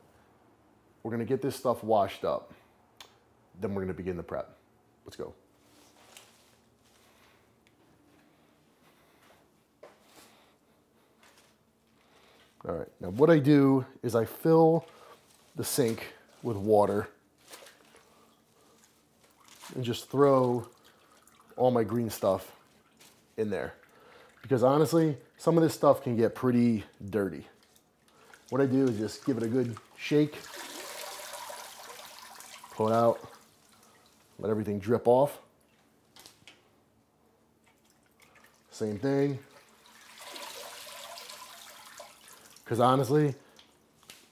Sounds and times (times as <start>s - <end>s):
Speech: 1.0s - 2.6s, 3.6s - 5.4s, 12.6s - 14.9s, 15.6s - 17.2s, 19.7s - 20.7s, 21.6s - 22.6s, 23.4s - 23.8s, 24.5s - 27.6s, 28.5s - 30.4s, 32.8s - 33.3s, 34.4s - 35.5s, 38.7s - 39.5s, 42.7s - 43.4s.